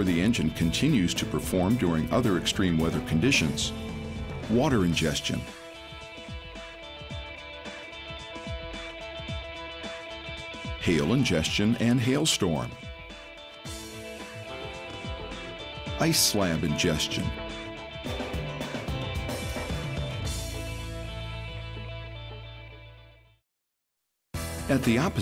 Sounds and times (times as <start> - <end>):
Speech: 0.0 - 3.7, 4.4 - 5.5, 10.8 - 12.8, 16.0 - 17.4, 24.7 - 25.2
Music: 0.0 - 23.4, 24.4 - 25.2.